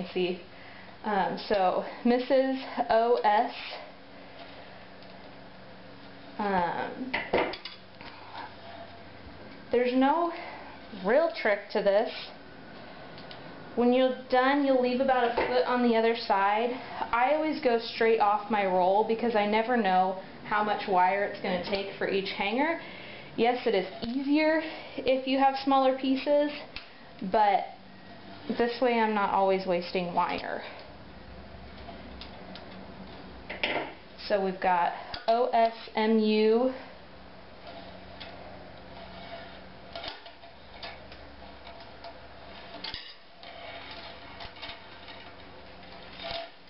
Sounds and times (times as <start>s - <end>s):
Speech: 0.0s - 0.4s, 1.0s - 3.8s, 6.4s - 7.1s, 9.8s - 12.2s, 13.8s - 22.8s, 23.4s - 27.8s, 28.5s - 30.8s, 34.2s - 36.8s.